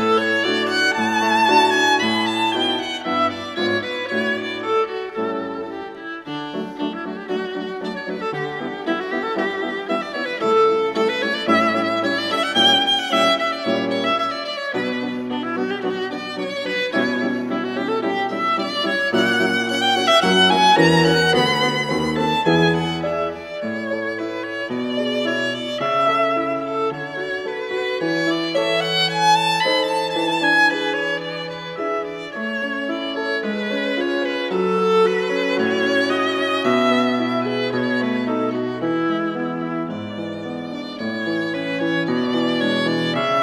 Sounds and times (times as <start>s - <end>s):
Violin, fiddle: 0.0s - 43.4s.